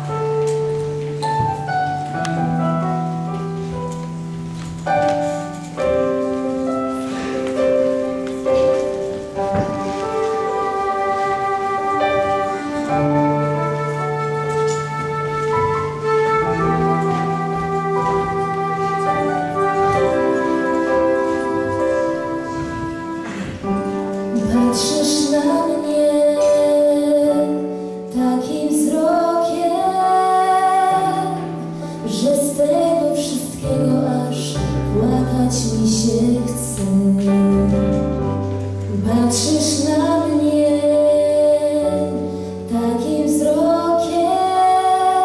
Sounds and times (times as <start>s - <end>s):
Music: 0.0s - 45.2s
Female singing: 24.3s - 37.8s, 38.9s - 45.2s.